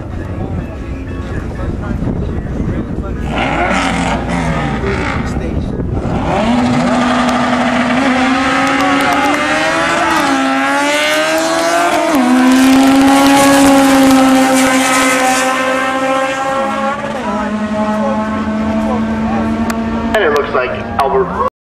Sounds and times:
Speech: 0:00.0 - 0:03.5, 0:17.2 - 0:21.5.

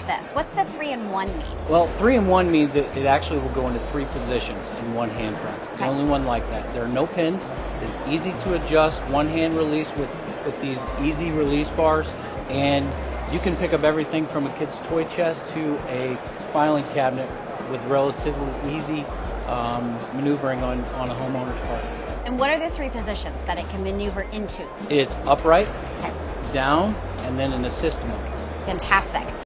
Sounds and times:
Music: 0:00.0 - 0:29.4
Speech: 0:00.0 - 0:29.4.

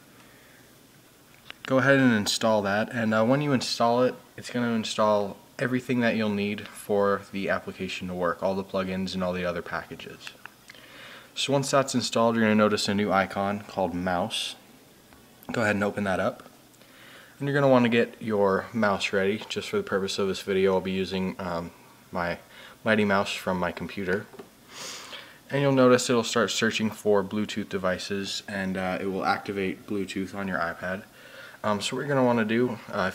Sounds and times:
Speech: 0:01.6 - 0:10.4, 0:11.4 - 0:14.6, 0:15.5 - 0:16.5, 0:17.4 - 0:24.4, 0:25.5 - 0:33.1.

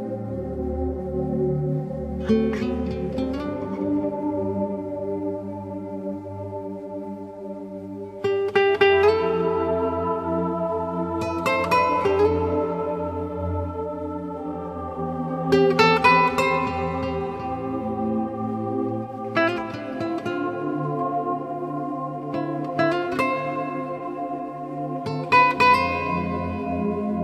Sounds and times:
Music: 0:00.0 - 0:27.2.

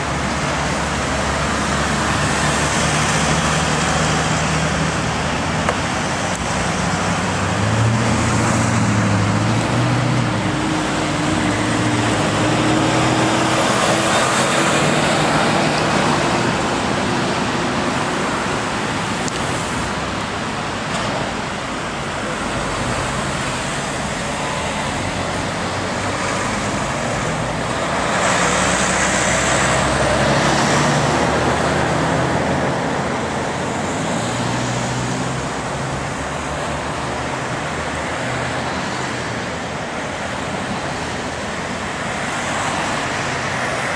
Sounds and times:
Car: 0:00.0 - 0:43.9
Traffic noise, roadway noise: 0:00.0 - 0:43.9
Truck: 0:00.0 - 0:43.9.

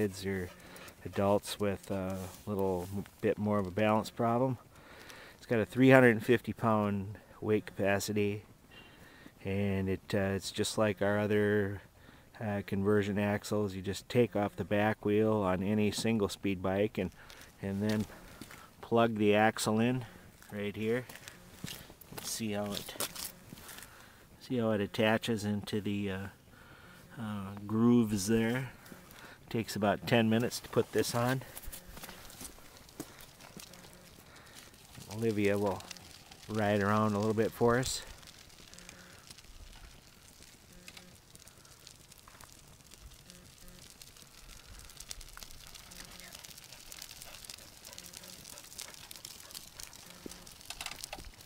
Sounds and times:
Speech: 0:00.0 - 0:04.6, 0:05.4 - 0:08.4, 0:09.4 - 0:11.8, 0:12.4 - 0:18.1, 0:18.8 - 0:21.1, 0:22.2 - 0:23.0, 0:24.4 - 0:26.4, 0:27.2 - 0:28.7, 0:29.5 - 0:31.5, 0:35.1 - 0:35.9, 0:36.5 - 0:38.1.

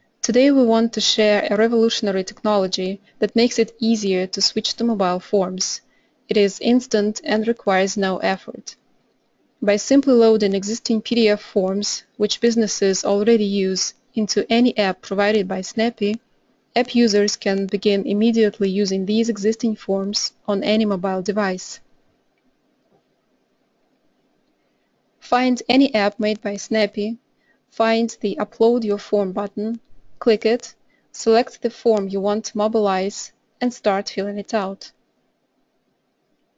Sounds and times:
Speech: 0:00.2 - 0:08.8, 0:09.6 - 0:16.2, 0:16.8 - 0:21.8, 0:25.2 - 0:27.2, 0:27.8 - 0:35.0.

